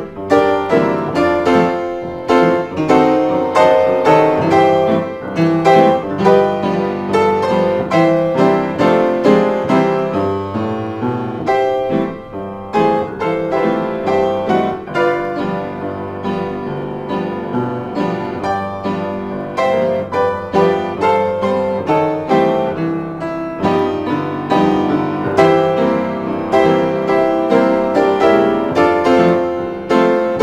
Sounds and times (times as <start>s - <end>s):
Inside, small room: 0.0s - 30.4s
Piano: 0.0s - 30.4s.